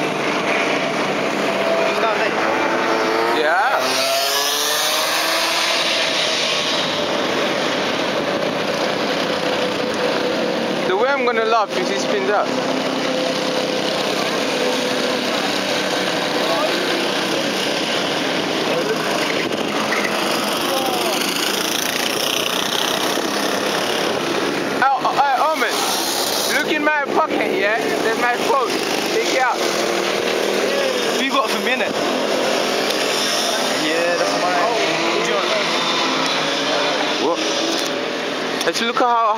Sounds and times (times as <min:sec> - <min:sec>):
Accelerating, revving, vroom: 0:00.0 - 0:10.8, 0:11.5 - 0:24.5, 0:27.7 - 0:39.2
Vehicle: 0:00.0 - 0:39.3.